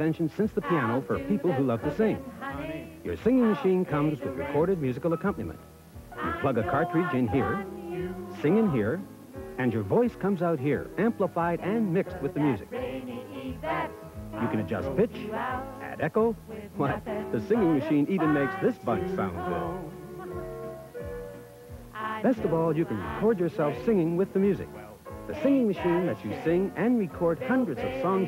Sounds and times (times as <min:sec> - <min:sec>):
Speech: 0:00.0 - 0:02.2, 0:03.1 - 0:05.6, 0:06.2 - 0:07.7, 0:08.3 - 0:09.0, 0:09.6 - 0:12.6, 0:14.4 - 0:19.8, 0:22.2 - 0:28.2
Music: 0:00.0 - 0:28.2
Female singing: 0:00.4 - 0:04.8, 0:06.2 - 0:09.0, 0:11.7 - 0:20.5, 0:22.0 - 0:23.4, 0:25.4 - 0:28.2.